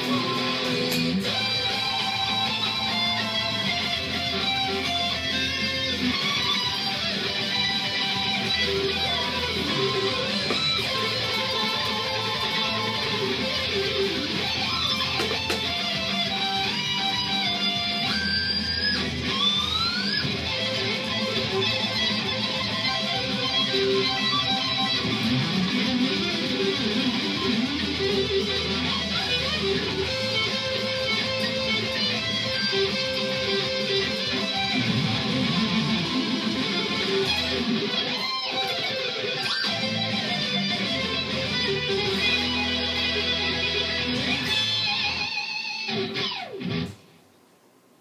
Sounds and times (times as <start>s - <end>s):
Guitar: 0.0s - 47.6s
Inside, small room: 0.0s - 48.0s.